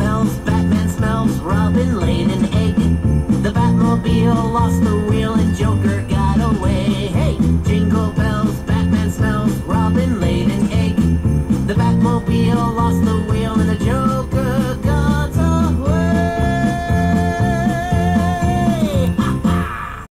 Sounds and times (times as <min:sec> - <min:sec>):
Music: 0:00.0 - 0:20.1.